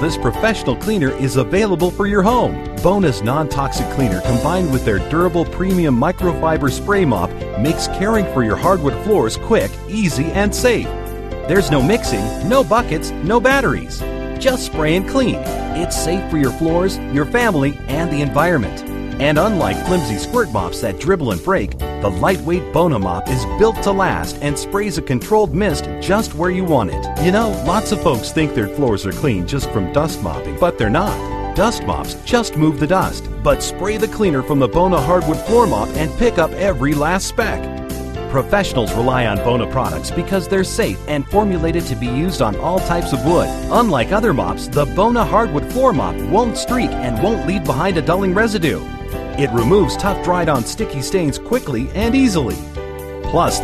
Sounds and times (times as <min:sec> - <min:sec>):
Speech: 0:00.0 - 0:10.9, 0:11.5 - 0:37.7, 0:38.3 - 0:48.8, 0:49.4 - 0:52.6, 0:53.3 - 0:53.6
Music: 0:00.0 - 0:53.6.